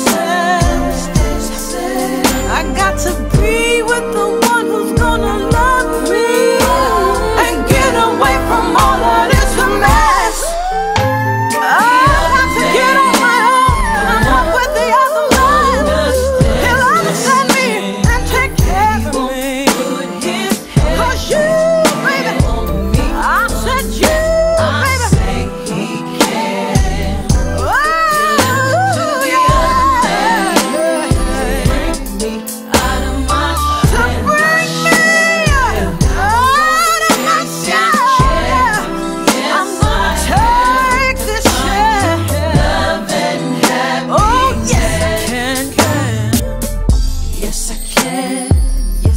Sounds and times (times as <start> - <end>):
Pop music: 0.0 - 49.1.